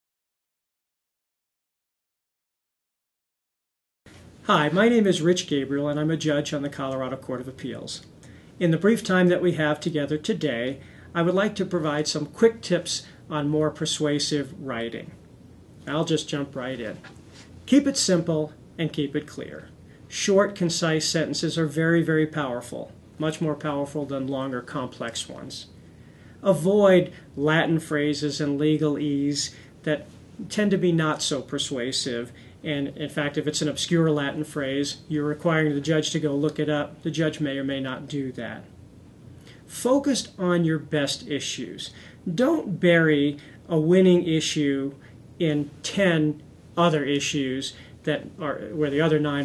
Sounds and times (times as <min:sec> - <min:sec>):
Speech: 0:04.4 - 0:15.2, 0:15.8 - 0:17.1, 0:17.7 - 0:25.8, 0:26.4 - 0:38.8, 0:39.7 - 0:49.4.